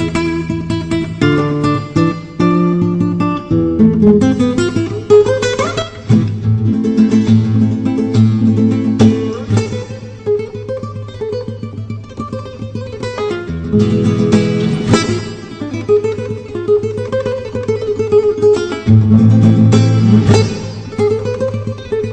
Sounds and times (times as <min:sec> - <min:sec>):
Acoustic guitar: 0:00.0 - 0:22.1
Strum: 0:00.0 - 0:22.1.